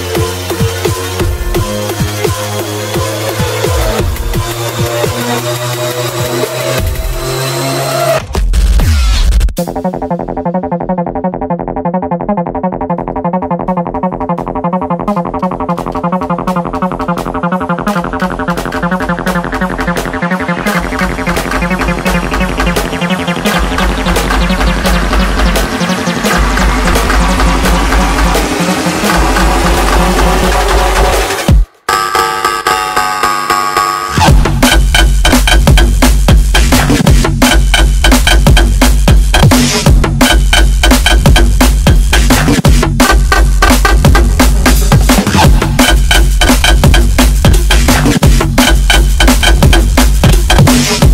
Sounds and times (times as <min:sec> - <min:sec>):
Dubstep: 0:00.0 - 0:51.1.